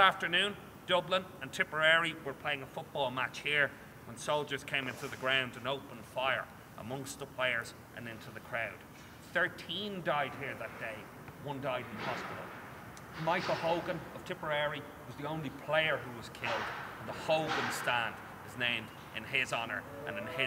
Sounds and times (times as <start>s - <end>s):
Speech: 0.0s - 12.5s, 13.2s - 20.4s.